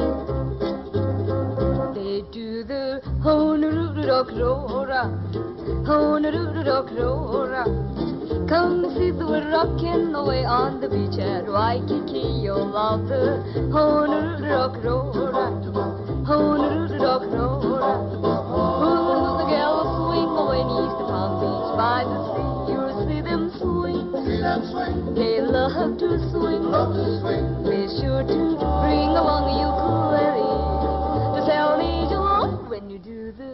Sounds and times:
Dance music: 0:18.5 - 0:23.3.

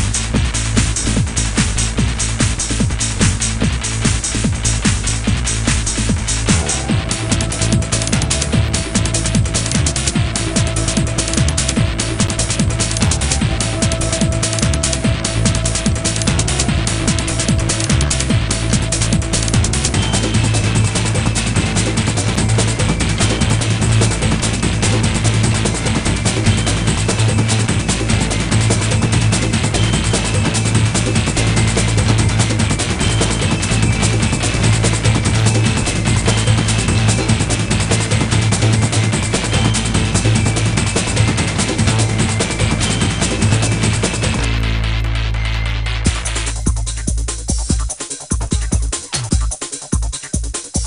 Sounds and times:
Music: 0:00.0 - 0:50.8.

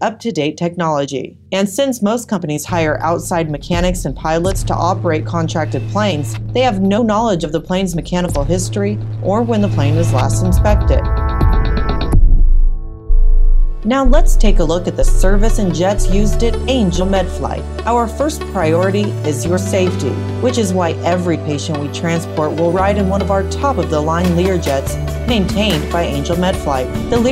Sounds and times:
Speech: 0:00.0 - 0:11.1, 0:13.8 - 0:27.3
Music: 0:00.0 - 0:27.3.

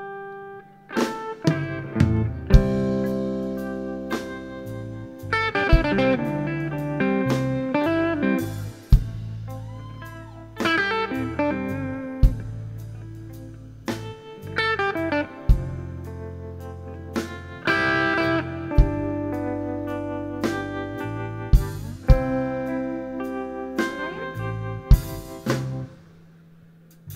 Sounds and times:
Music: 0:00.0 - 0:27.1.

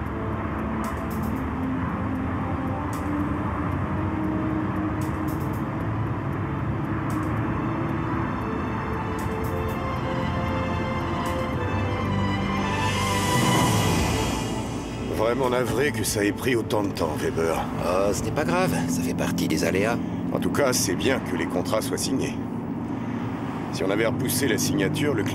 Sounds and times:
Music: 0:00.0 - 0:22.6.

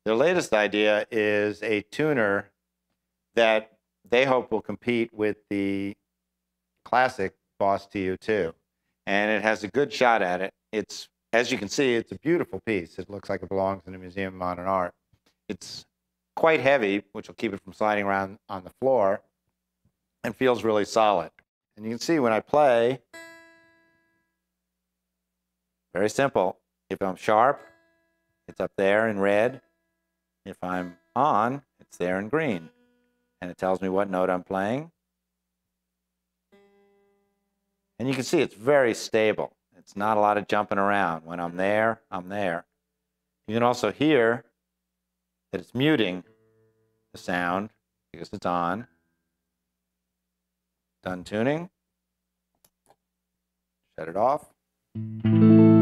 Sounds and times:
Speech: 0:00.0 - 0:02.6, 0:03.4 - 0:06.0, 0:06.9 - 0:19.3, 0:20.2 - 0:23.1, 0:25.9 - 0:27.6, 0:28.5 - 0:29.6, 0:30.5 - 0:32.7, 0:33.4 - 0:35.0, 0:38.0 - 0:42.7, 0:43.5 - 0:44.6, 0:45.5 - 0:46.3, 0:47.1 - 0:48.9, 0:51.0 - 0:51.8, 0:54.0 - 0:54.6.

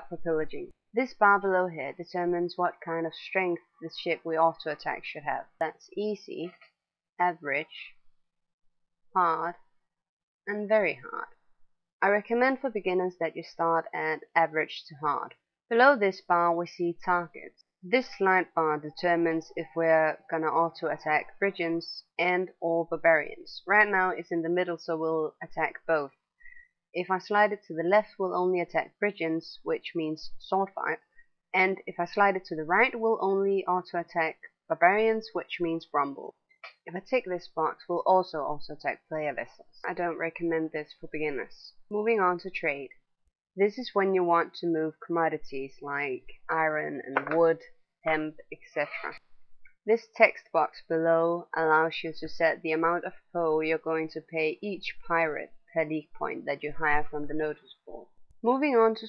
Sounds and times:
Speech: 0:00.0 - 0:06.6, 0:07.2 - 0:07.9, 0:09.2 - 0:09.5, 0:10.5 - 0:11.3, 0:12.0 - 0:26.1, 0:27.0 - 0:31.0, 0:31.6 - 0:42.9, 0:43.6 - 0:49.2, 0:49.9 - 0:59.0.

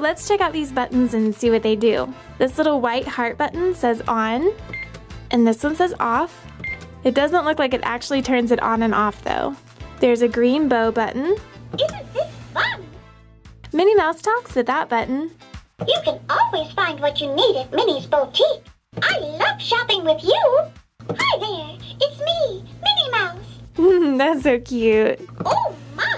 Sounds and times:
Speech: 0:00.0 - 0:04.6, 0:13.7 - 0:23.4, 0:24.0 - 0:25.3
Music: 0:00.0 - 0:26.1.

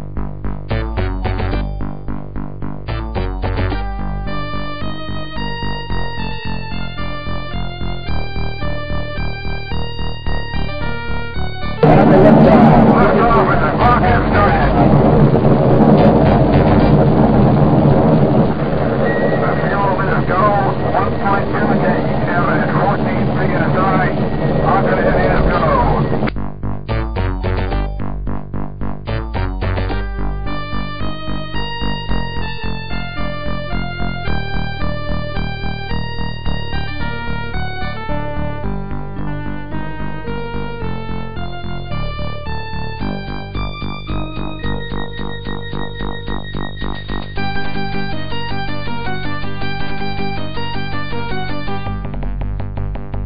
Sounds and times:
Music: 0:00.0 - 0:53.2
Speech: 0:11.8 - 0:15.0, 0:19.2 - 0:26.2.

